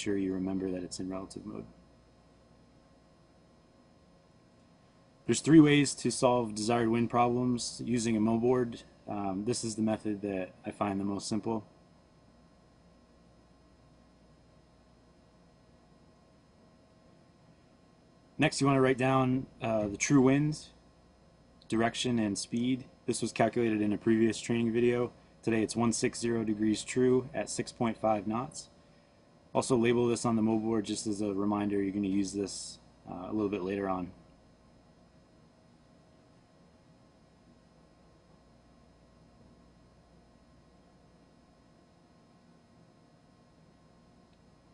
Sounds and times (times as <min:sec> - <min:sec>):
Speech: 0:00.0 - 0:01.8, 0:05.3 - 0:11.7, 0:18.4 - 0:20.8, 0:21.7 - 0:28.7, 0:29.5 - 0:34.2.